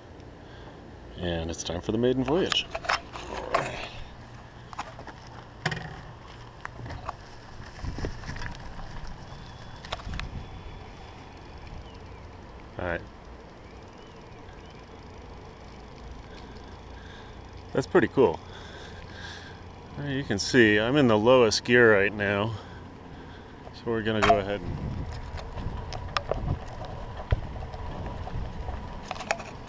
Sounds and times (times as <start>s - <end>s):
Speech: 1.2s - 2.7s, 20.0s - 22.6s, 23.8s - 24.7s
Bicycle: 2.5s - 29.6s.